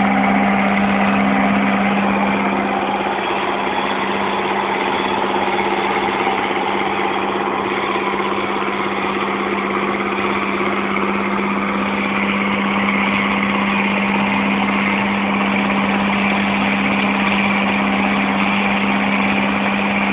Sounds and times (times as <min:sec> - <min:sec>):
Medium engine (mid frequency): 0:00.0 - 0:20.1
Vehicle: 0:00.0 - 0:20.1.